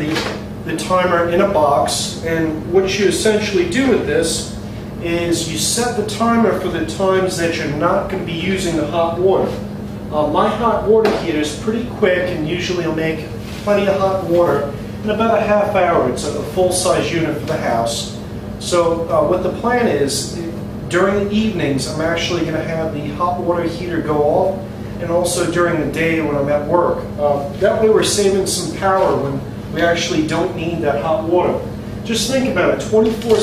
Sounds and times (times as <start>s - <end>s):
Speech: 0.0s - 33.4s.